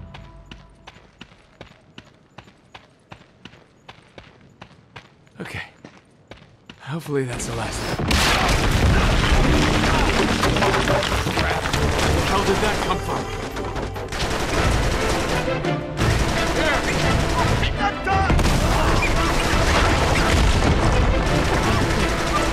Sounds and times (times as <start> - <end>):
Music: 0.0 - 1.0, 8.8 - 22.5
Speech: 5.4 - 5.8, 6.8 - 8.0.